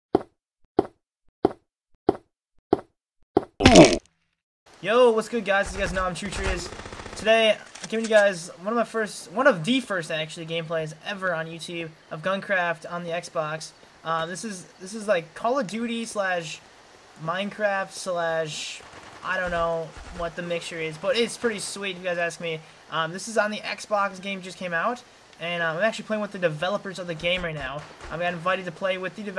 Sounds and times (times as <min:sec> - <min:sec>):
Speech: 0:04.8 - 0:16.6, 0:17.2 - 0:29.3.